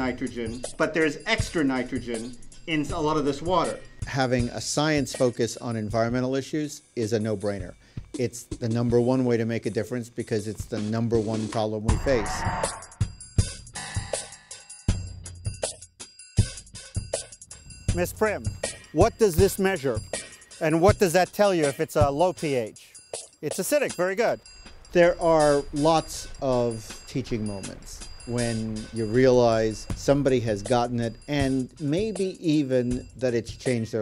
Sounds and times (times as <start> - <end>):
Speech: 0.0 - 12.4, 17.9 - 20.0, 20.6 - 24.4, 25.0 - 34.0
Music: 0.0 - 34.0.